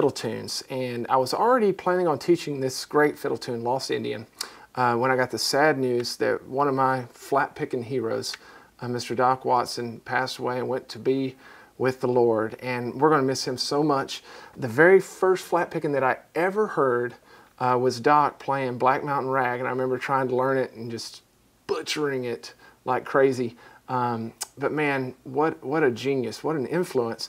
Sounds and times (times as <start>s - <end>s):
Speech: 0.0s - 27.2s.